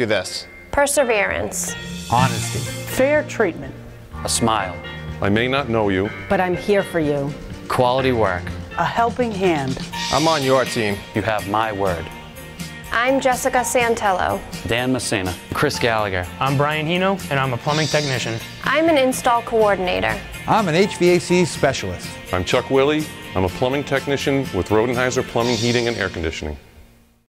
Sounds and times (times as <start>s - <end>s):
Music: 0.0s - 27.3s
Speech: 22.4s - 26.6s.